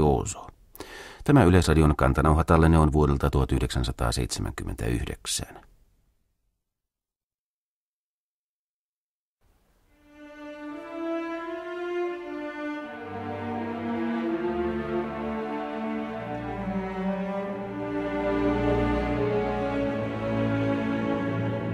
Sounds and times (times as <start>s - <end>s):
Violin, fiddle: 10.0s - 21.7s.